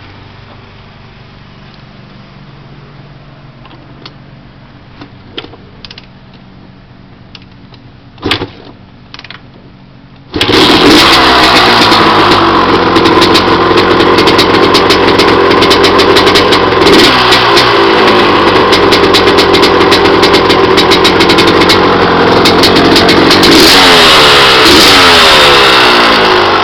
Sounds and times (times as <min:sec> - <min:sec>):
Motorcycle: 0:00.0 - 0:26.6
Outside, urban or manmade: 0:00.0 - 0:26.6.